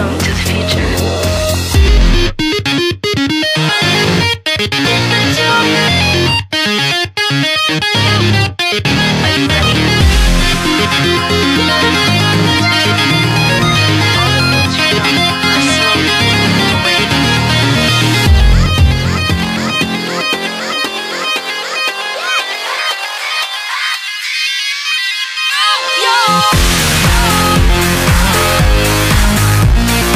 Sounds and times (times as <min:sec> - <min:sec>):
Music: 0:00.0 - 0:30.1.